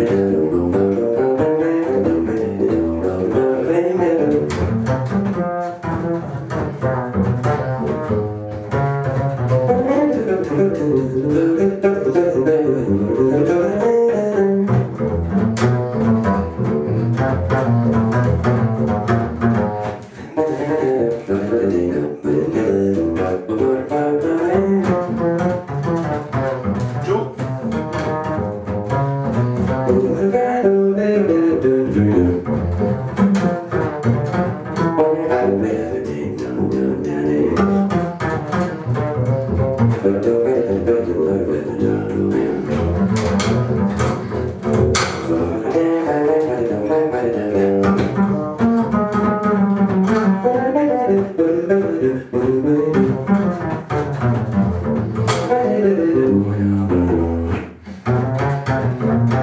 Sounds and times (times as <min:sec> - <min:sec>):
Double bass: 0:00.0 - 0:59.4.